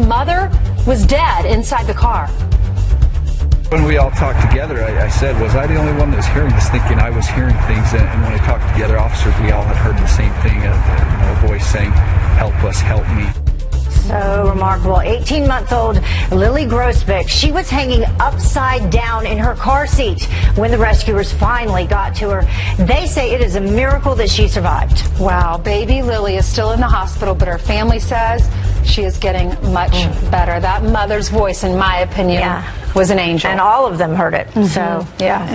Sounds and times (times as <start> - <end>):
Music: 0.0 - 35.5
Speech: 3.7 - 13.4, 27.6 - 35.5.